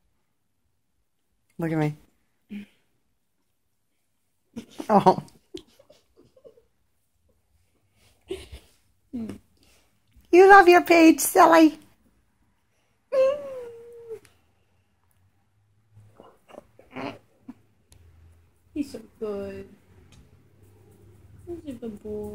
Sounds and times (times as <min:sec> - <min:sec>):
Inside, small room: 0:00.0 - 0:22.3
Speech: 0:10.4 - 0:11.8, 0:18.8 - 0:19.8, 0:21.5 - 0:22.3.